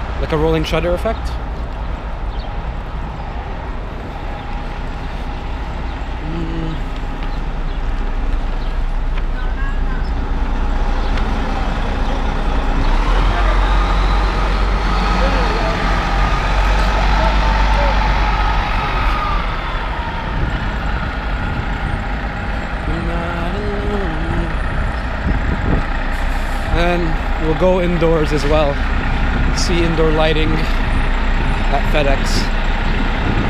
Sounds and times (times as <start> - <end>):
Speech: 0.2 - 1.4, 26.7 - 28.8, 29.6 - 30.8, 31.7 - 32.5.